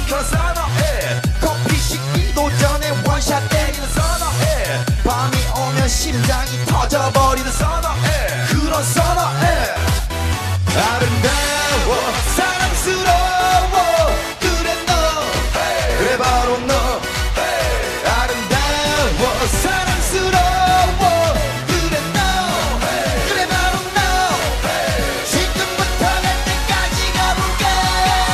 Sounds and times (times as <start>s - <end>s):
Singing: 0.0s - 10.0s, 10.7s - 28.3s
Music: 0.0s - 28.3s.